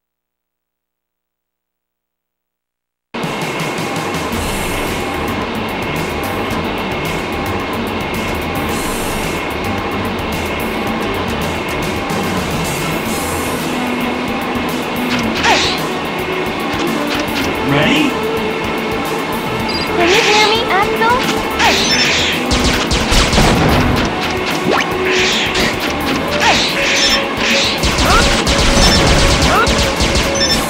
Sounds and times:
Music: 3.2s - 30.7s
Speech: 17.6s - 18.2s, 20.0s - 21.8s.

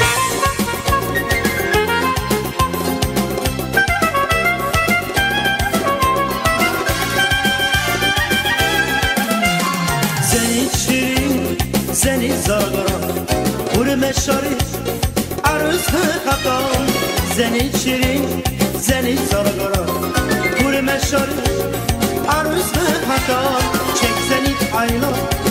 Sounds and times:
Folk music: 0.0s - 25.5s.

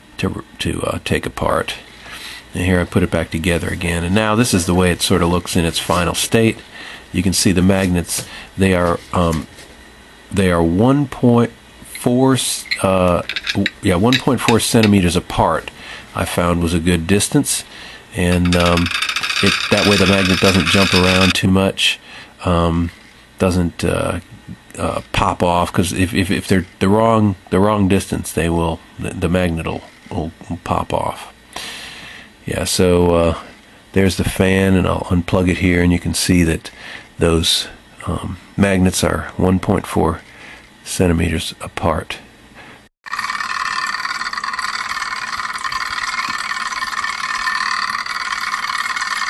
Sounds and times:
Speech: 0.2s - 1.9s, 2.5s - 9.6s, 10.3s - 31.4s, 32.4s - 42.3s.

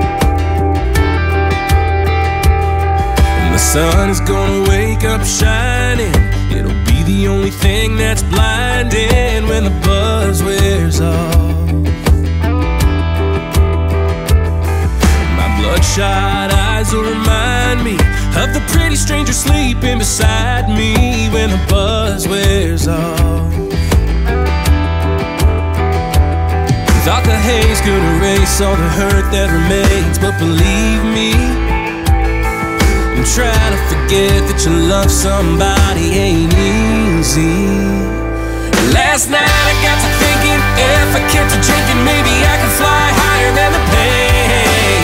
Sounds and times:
Music: 0.0s - 45.0s.

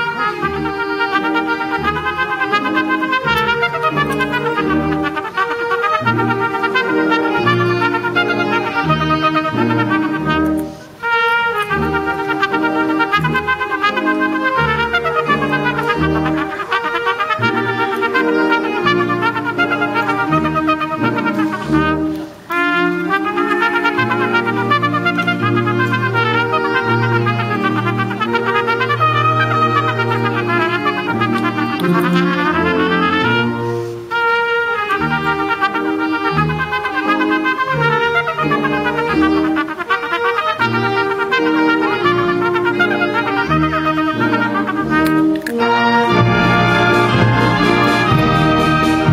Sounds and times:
Classical music: 0.0s - 49.1s
Trumpet: 0.0s - 49.1s.

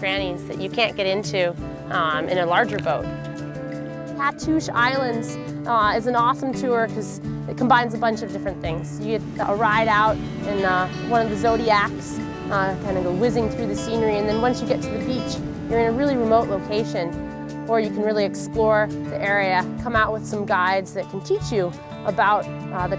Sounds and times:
Speech: 0.0s - 3.1s, 4.2s - 17.1s, 17.7s - 22.9s
Music: 0.0s - 22.9s
Boat, Water vehicle: 7.5s - 20.8s.

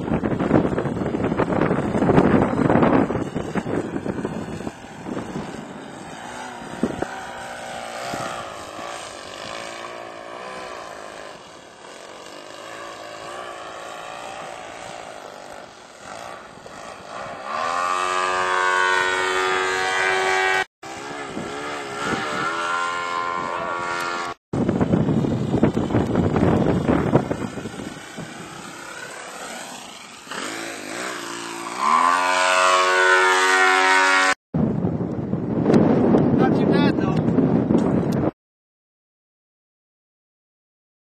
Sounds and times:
Wind noise (microphone): 0.0s - 10.6s, 19.2s - 29.4s, 34.6s - 38.4s
Speech: 36.4s - 37.2s.

